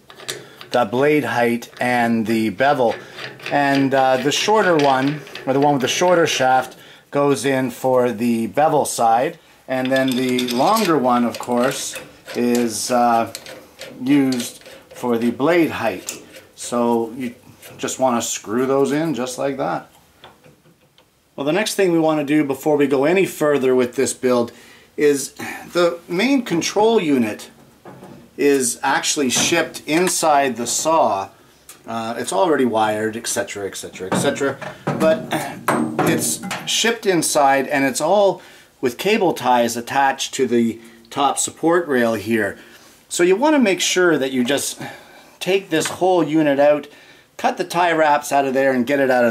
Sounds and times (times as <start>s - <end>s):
Tools: 0.0s - 0.8s, 2.9s - 6.2s, 9.8s - 15.1s
Speech: 0.7s - 13.4s, 14.0s - 19.9s, 21.4s - 27.6s, 28.4s - 49.3s.